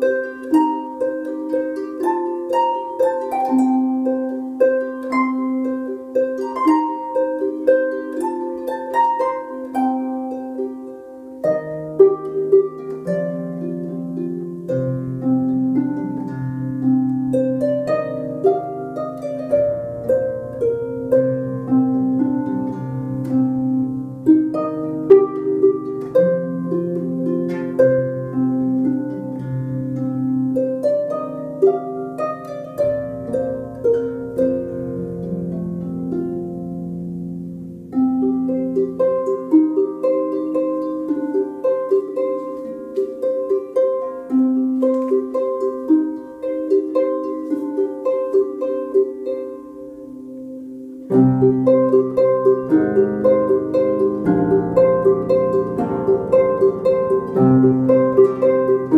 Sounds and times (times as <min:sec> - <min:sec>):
Harp: 0:00.0 - 0:58.9
Pizzicato: 0:00.0 - 0:58.9.